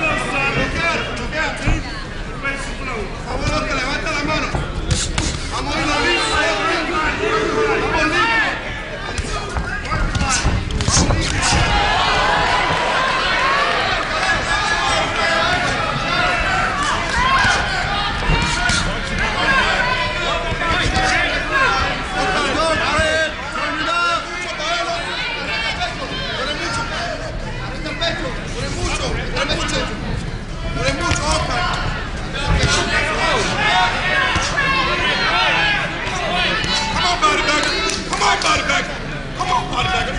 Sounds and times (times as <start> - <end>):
Inside, large room or hall: 0.0 - 40.1
Speech: 0.0 - 40.1.